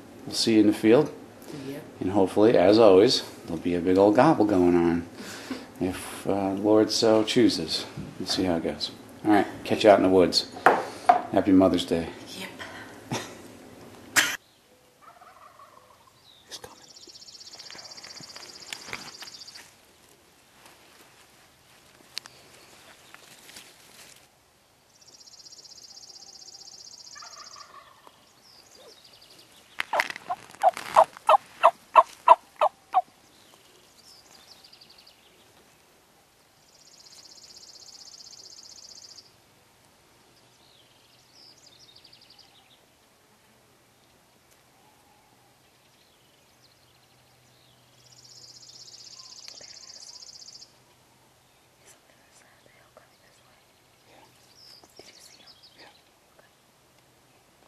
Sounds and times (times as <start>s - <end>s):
Speech: 5.8s - 10.5s, 11.4s - 12.6s.